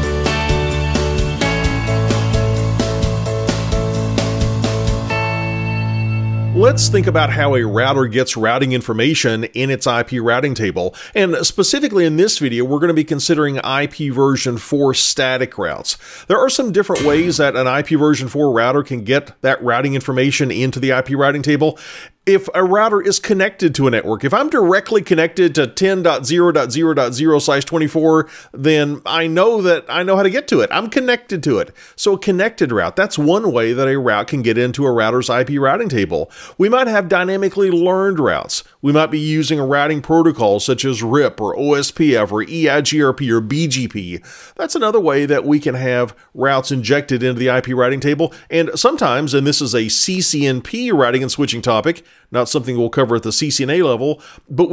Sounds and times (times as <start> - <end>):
Speech: 6.6 - 54.7.